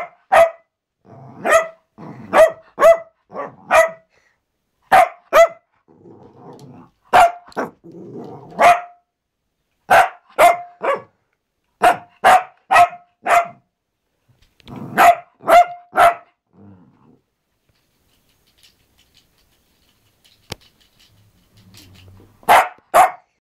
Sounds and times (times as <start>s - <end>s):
Bark: 0.0s - 0.7s, 1.4s - 4.1s, 4.9s - 5.7s, 7.1s - 7.7s, 8.5s - 9.0s, 9.9s - 11.2s, 11.8s - 13.6s, 14.9s - 16.4s, 22.5s - 23.4s.